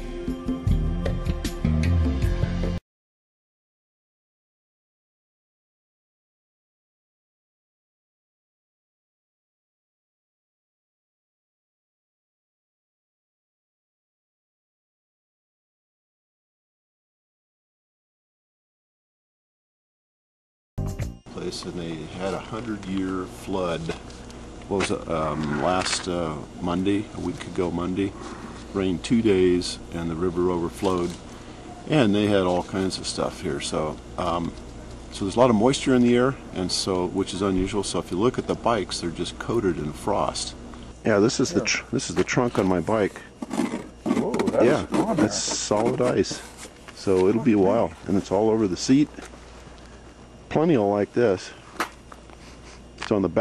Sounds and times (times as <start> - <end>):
Music: 0.0 - 2.8, 20.8 - 21.4.